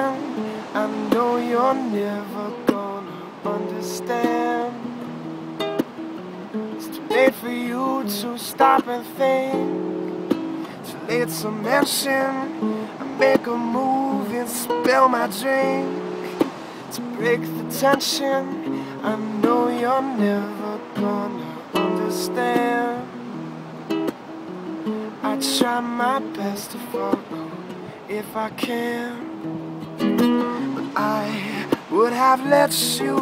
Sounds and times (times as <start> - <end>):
Waves, surf: 0.0 - 33.2
Wind: 0.0 - 33.2.